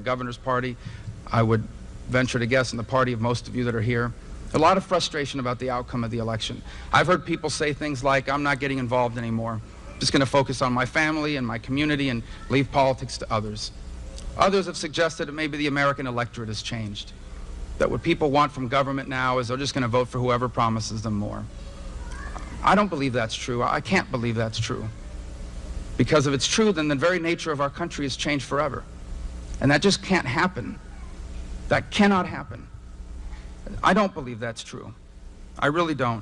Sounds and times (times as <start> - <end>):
Male speech, man speaking: 0.0 - 13.8, 14.4 - 17.1, 17.8 - 21.5, 22.6 - 25.0, 26.0 - 28.9, 29.6 - 30.8, 31.7 - 32.7, 33.7 - 35.0, 35.6 - 36.2
Narration, monologue: 0.0 - 36.2.